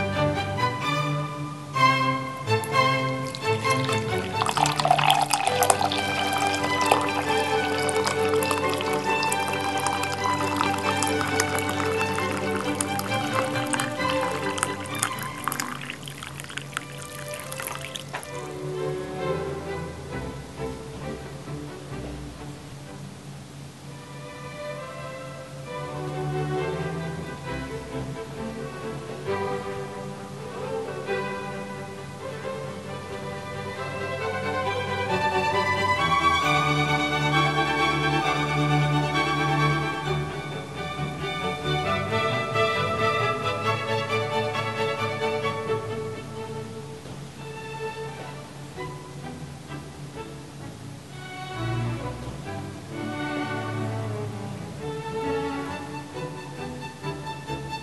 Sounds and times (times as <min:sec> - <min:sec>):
Music: 0:00.0 - 0:23.2, 0:23.9 - 0:57.8.